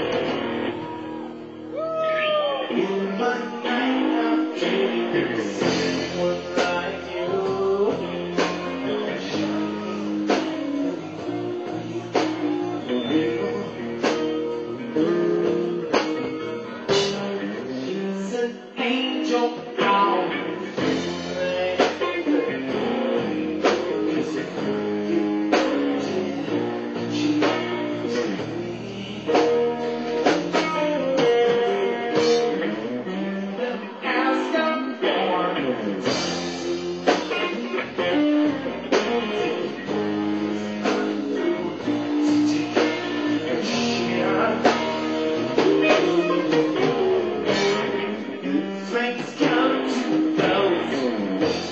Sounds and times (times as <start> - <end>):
Blues: 0.0 - 51.7.